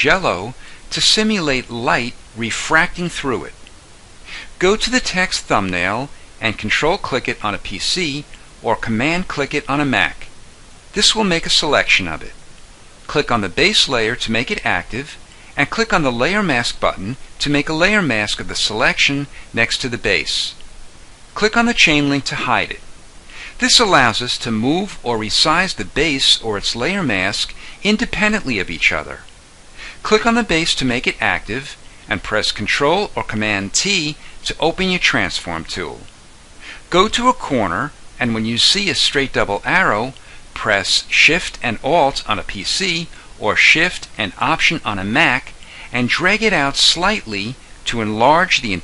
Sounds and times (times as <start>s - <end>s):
Narration, monologue: 0.0s - 48.8s.